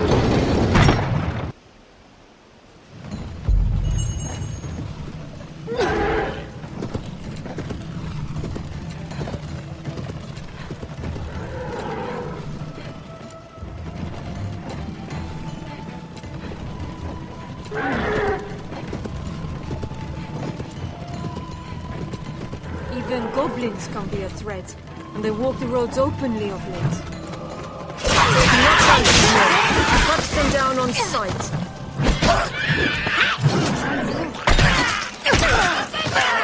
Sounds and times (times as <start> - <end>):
Run: 6.5 - 22.9, 27.0 - 28.0
Speech: 23.0 - 27.0, 28.4 - 31.5.